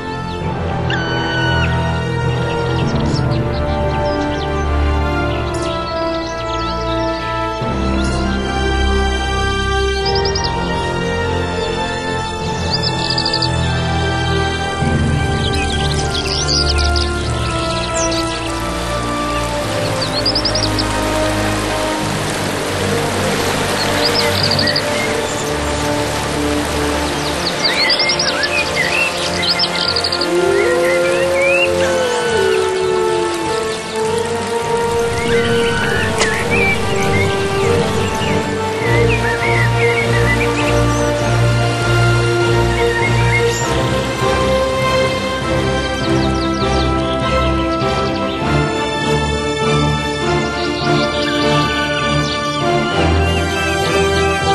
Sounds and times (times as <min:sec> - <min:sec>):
Music: 0:00.0 - 0:54.5.